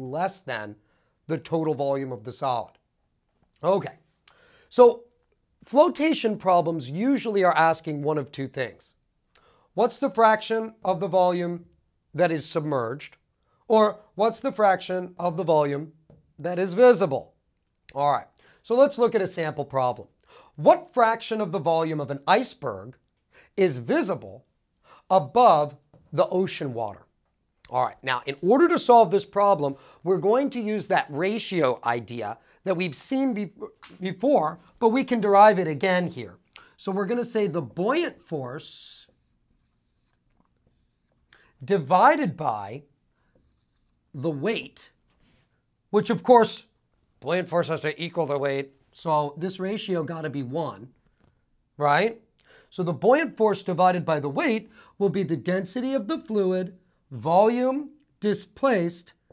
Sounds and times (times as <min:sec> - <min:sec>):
Writing: 0:38.7 - 0:41.3, 0:43.2 - 0:44.2.